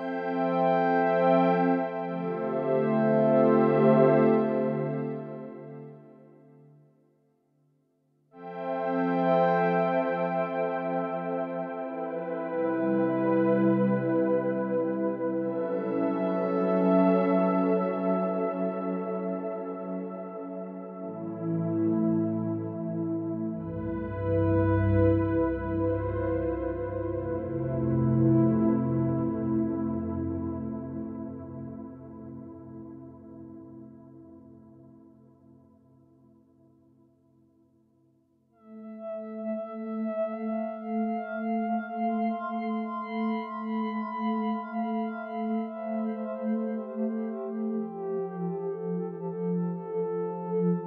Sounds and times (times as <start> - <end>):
Music: 0.0 - 50.8.